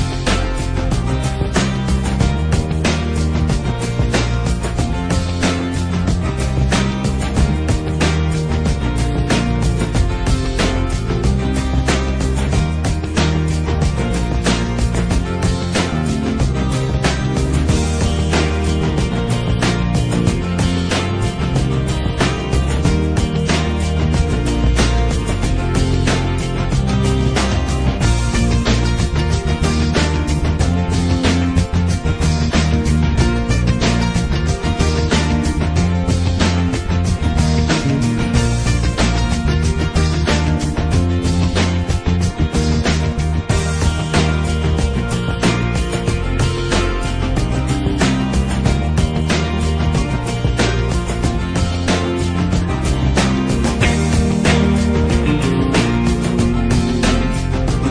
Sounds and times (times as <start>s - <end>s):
Music: 0.0s - 57.9s.